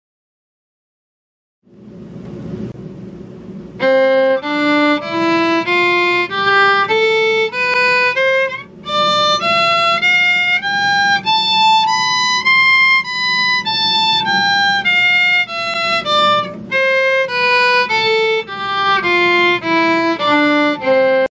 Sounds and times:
Violin, fiddle: 3.8 - 21.3.

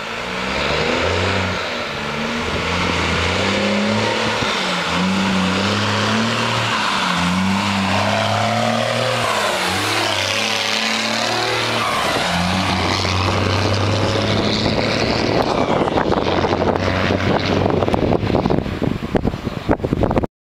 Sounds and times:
Vehicle: 0.0 - 20.3.

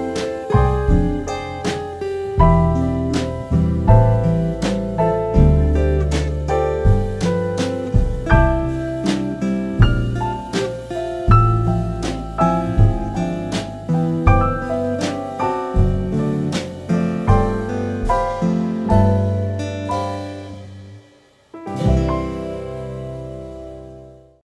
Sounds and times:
Music: 0.0 - 24.4.

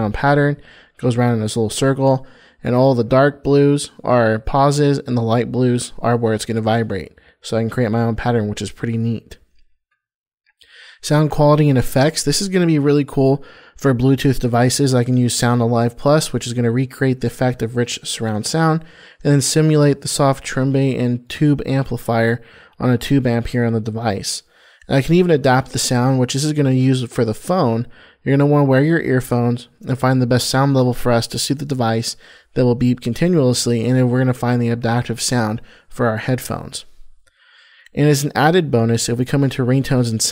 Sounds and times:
Speech: 0.0 - 9.5, 10.7 - 36.9, 37.9 - 40.3.

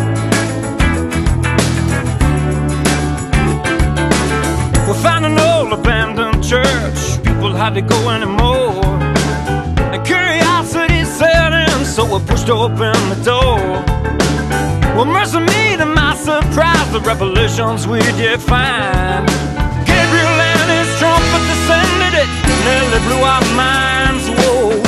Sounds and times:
Exciting music: 0.0 - 10.9, 18.0 - 24.8.

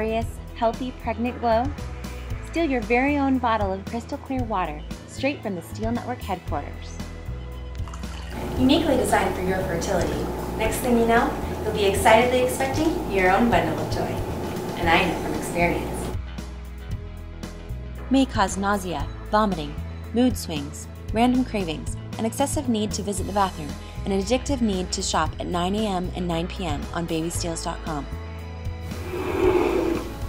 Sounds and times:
Speech: 0.0 - 1.7, 2.5 - 6.9, 8.4 - 14.2, 14.8 - 16.2, 18.1 - 28.1
Music: 0.0 - 30.2.

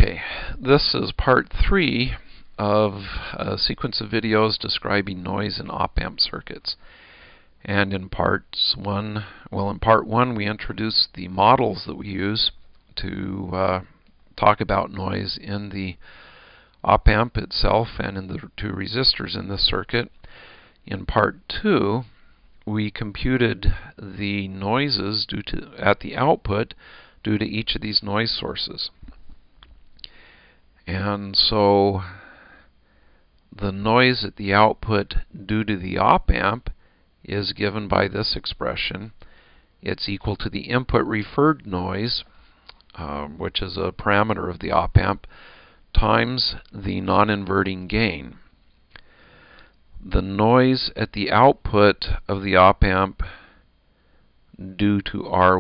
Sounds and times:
Speech: 0.0 - 6.8, 7.6 - 16.0, 16.8 - 20.2, 20.9 - 29.0, 30.8 - 32.2, 33.6 - 39.2, 39.8 - 42.3, 42.9 - 45.3, 45.9 - 48.4, 50.0 - 53.3, 54.6 - 55.6.

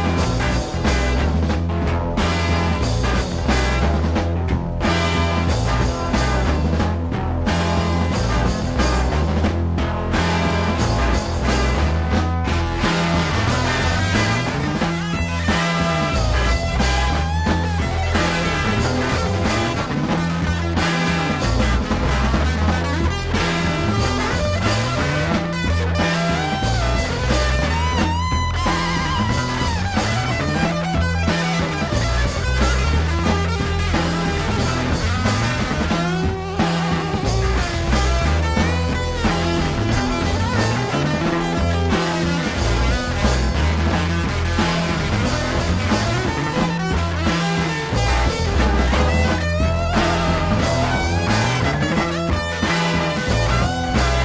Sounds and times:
Psychedelic rock: 0.0 - 54.2.

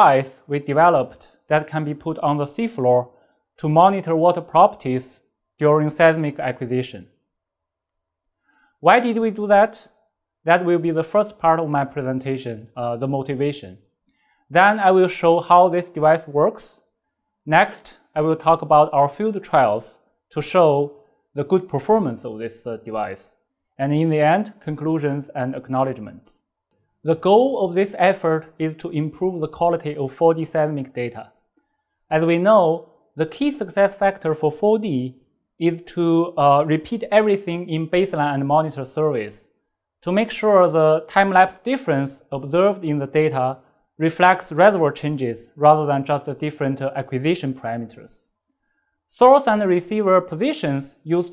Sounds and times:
Speech: 0.0 - 7.1, 8.8 - 9.9, 10.5 - 13.8, 14.5 - 16.8, 17.5 - 26.3, 27.1 - 31.3, 32.1 - 48.3, 49.1 - 51.3.

